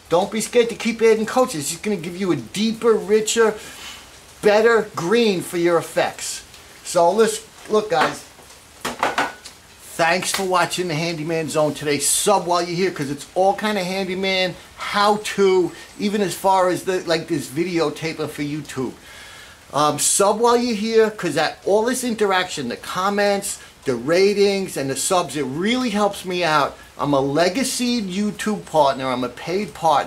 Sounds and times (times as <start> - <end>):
Speech: 0.1 - 3.6, 4.4 - 8.3, 9.9 - 19.0, 19.7 - 30.0.